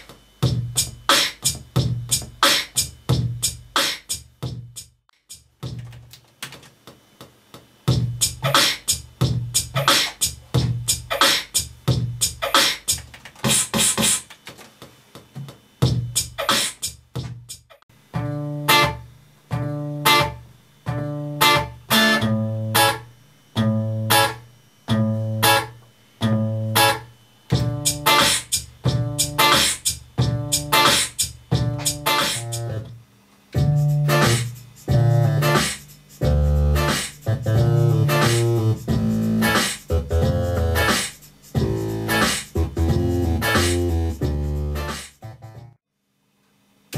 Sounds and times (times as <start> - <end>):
Beatboxing: 0.0 - 23.0, 26.2 - 45.8
Electronic tuner: 18.0 - 45.8.